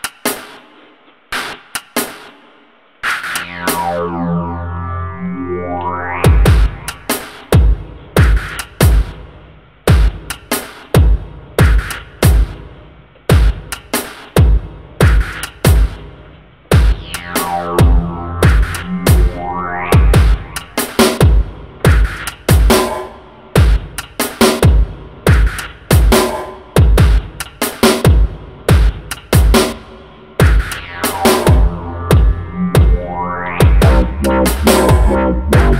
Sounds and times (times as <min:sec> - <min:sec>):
Dubstep: 0:03.0 - 0:09.2, 0:16.7 - 0:28.1, 0:30.4 - 0:35.7.